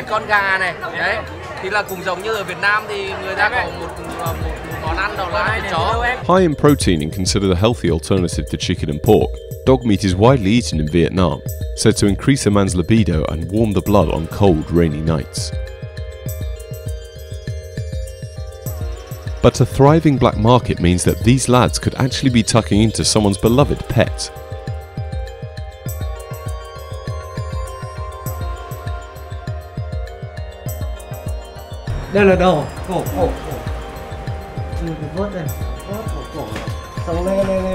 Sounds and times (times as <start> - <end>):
Speech: 0.0 - 15.5, 19.5 - 24.3, 32.1 - 33.6, 34.8 - 37.7
Synthesizer: 0.0 - 37.7.